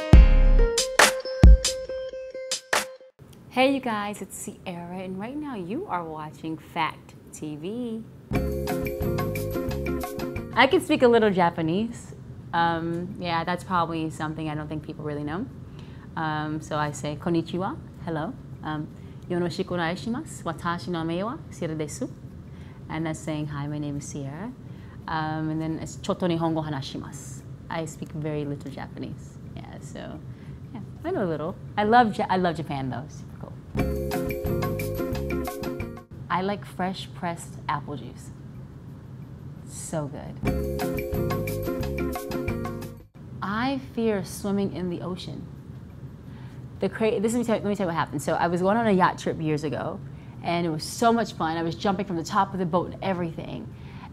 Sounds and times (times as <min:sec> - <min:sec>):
Speech: 0:03.5 - 0:08.1, 0:10.6 - 0:15.5, 0:16.2 - 0:22.2, 0:22.9 - 0:33.6, 0:36.3 - 0:38.4, 0:39.6 - 0:40.4, 0:43.4 - 0:45.5, 0:46.8 - 0:53.7.